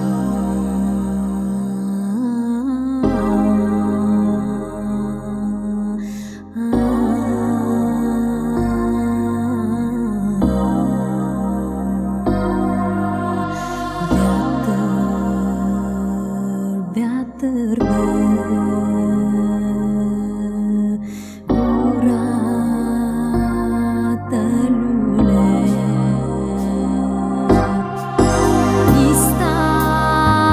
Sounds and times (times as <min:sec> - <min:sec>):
Music: 0:00.0 - 0:30.5.